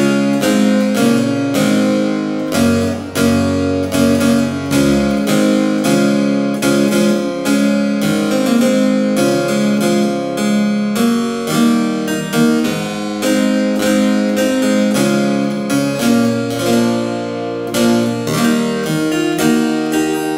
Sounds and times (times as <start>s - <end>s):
Harpsichord: 0.0s - 20.3s.